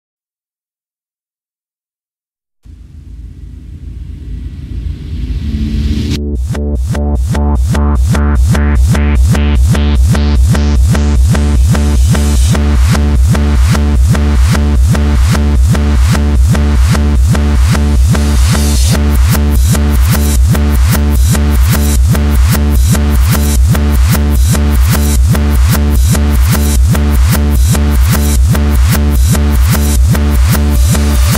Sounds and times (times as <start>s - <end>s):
Music: 2.7s - 31.3s.